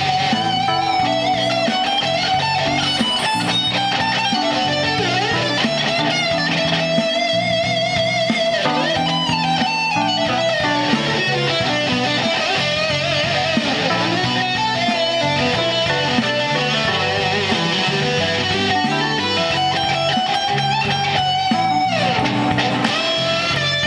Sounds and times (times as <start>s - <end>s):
Blues: 0.0s - 23.8s.